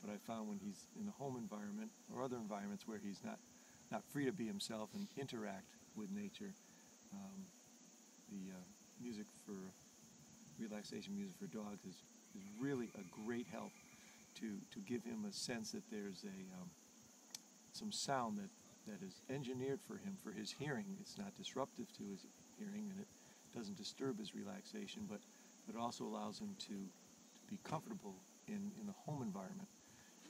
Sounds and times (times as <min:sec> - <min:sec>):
Speech: 0:00.0 - 0:07.5, 0:08.3 - 0:09.8, 0:10.6 - 0:13.8, 0:14.4 - 0:16.8, 0:17.7 - 0:26.9, 0:27.5 - 0:29.7.